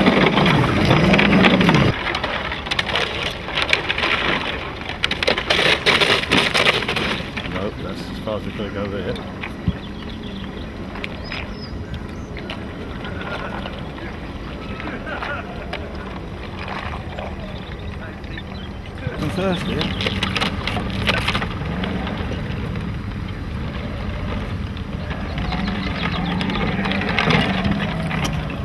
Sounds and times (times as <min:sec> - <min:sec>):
Boat, Water vehicle: 0:00.0 - 0:28.6
Speech: 0:07.5 - 0:09.2, 0:19.0 - 0:20.0.